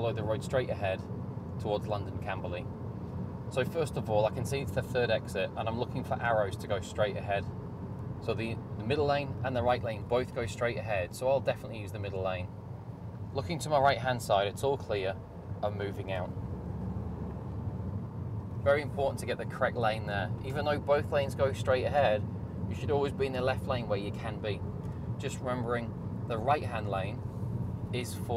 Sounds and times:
Speech: 0.0s - 1.0s, 1.6s - 2.6s, 3.6s - 7.4s, 8.3s - 12.5s, 13.4s - 16.3s, 18.6s - 24.6s, 25.2s - 27.2s, 27.9s - 28.3s.

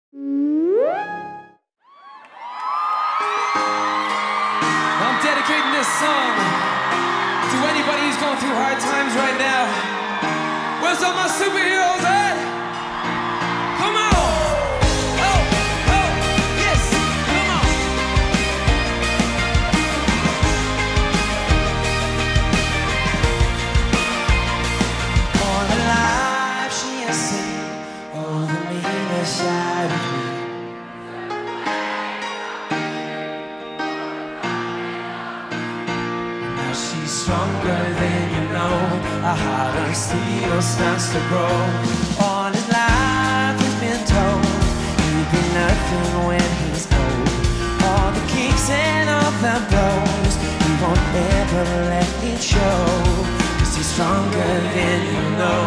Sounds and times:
Music: 2.7s - 55.6s
Speech: 7.5s - 9.8s.

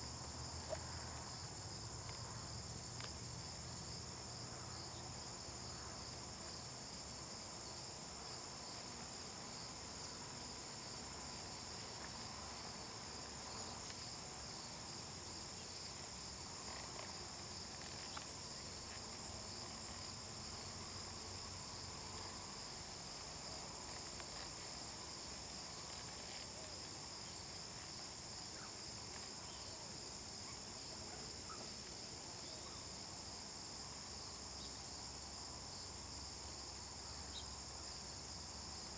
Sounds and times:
Insect: 0.0s - 38.9s.

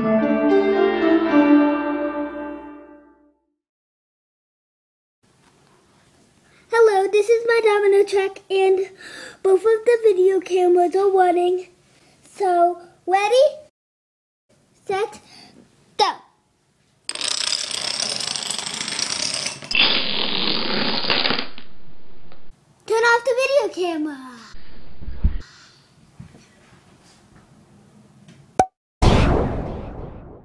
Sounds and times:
Speech: 6.7s - 13.7s, 14.8s - 15.3s, 16.0s - 16.3s, 22.9s - 24.5s.

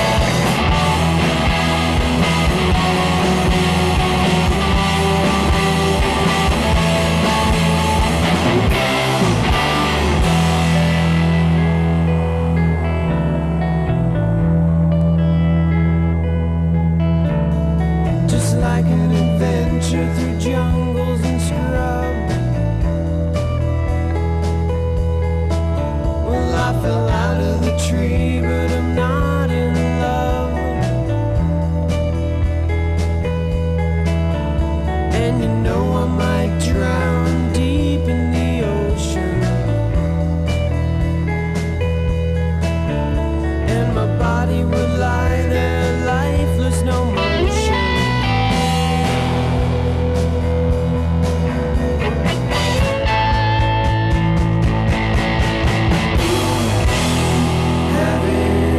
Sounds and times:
Music: 0.0s - 58.7s.

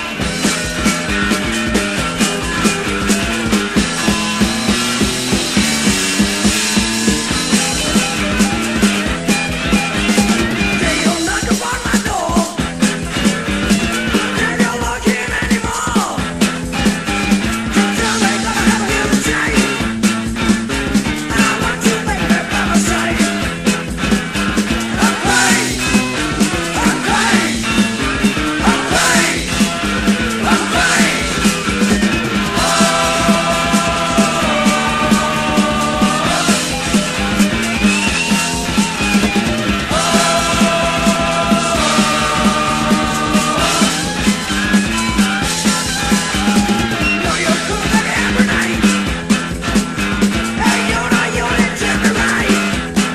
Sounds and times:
Music: 0.0s - 53.1s.

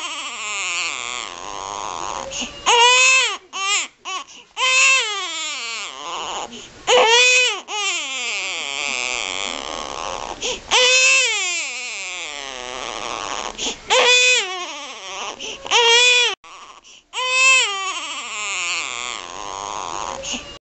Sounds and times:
Baby cry, infant cry: 0.0s - 20.6s.

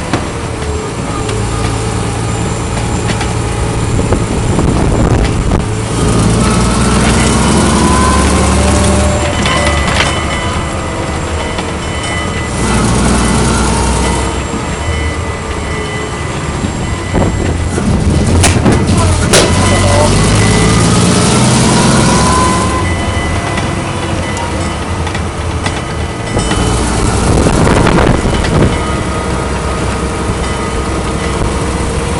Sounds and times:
Vehicle: 0.0s - 32.1s
Accelerating, revving, vroom: 5.9s - 9.5s, 19.2s - 22.8s.

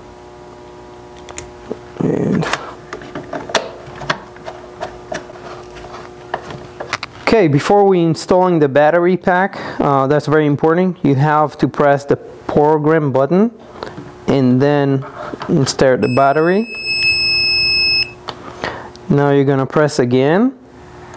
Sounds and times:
Speech: 2.0s - 2.6s, 7.2s - 13.6s, 14.3s - 16.7s, 19.1s - 20.6s.

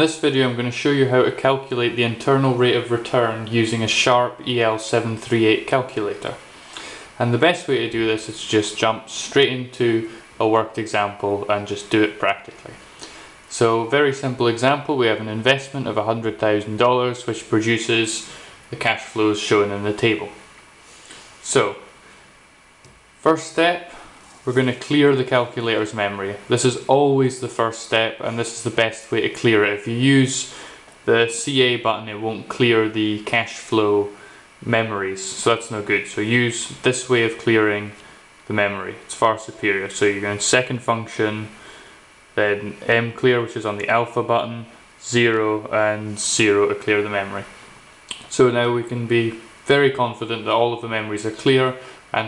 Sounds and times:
Speech: 0.0s - 6.5s, 7.2s - 12.8s, 13.5s - 20.5s, 21.4s - 22.0s, 23.2s - 41.6s, 42.4s - 52.2s.

